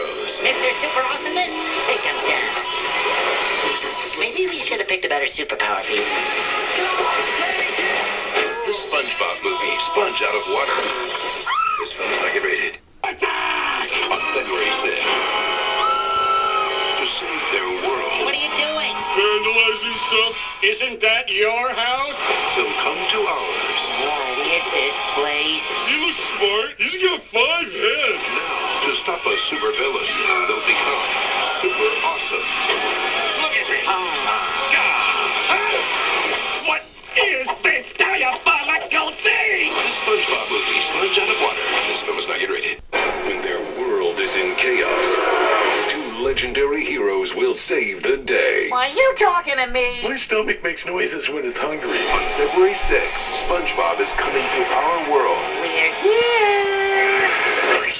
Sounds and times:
Music: 0.0s - 4.6s, 5.8s - 11.5s, 13.7s - 20.8s, 27.4s - 36.8s, 39.5s - 42.4s.

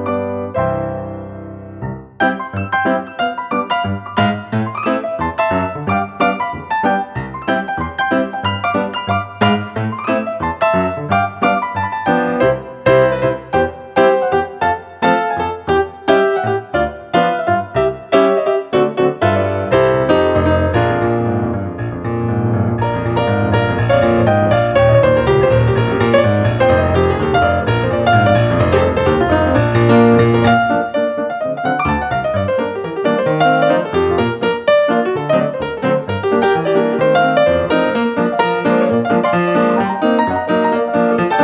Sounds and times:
Music: 0.0s - 41.4s.

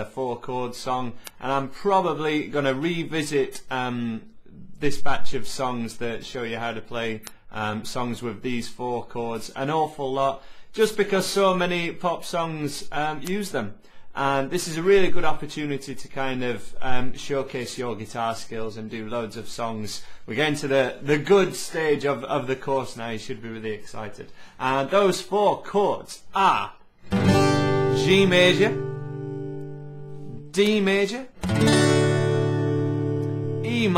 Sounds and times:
Speech: 0.0s - 26.9s, 28.0s - 28.8s, 30.3s - 31.4s, 33.6s - 33.9s.

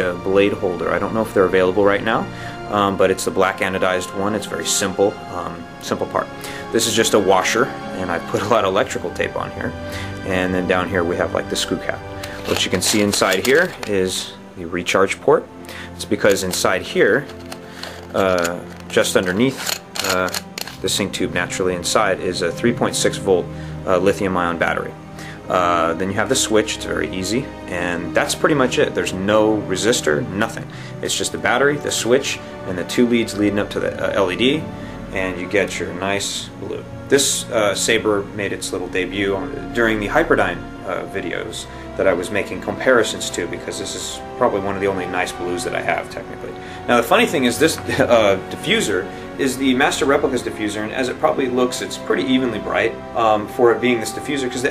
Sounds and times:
Speech: 0.0s - 17.3s, 18.1s - 54.7s
Music: 0.0s - 54.7s.

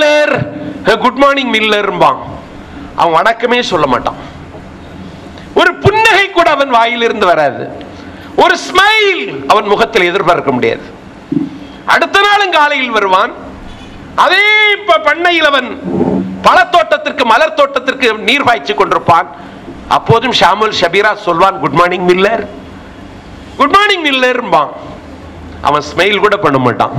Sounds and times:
Male speech, man speaking: 0.0s - 2.4s, 3.0s - 4.2s, 5.6s - 7.8s, 8.4s - 10.9s, 11.9s - 13.4s, 14.2s - 15.8s, 16.4s - 22.6s, 23.6s - 24.9s, 25.6s - 26.9s
Narration, monologue: 0.0s - 26.9s.

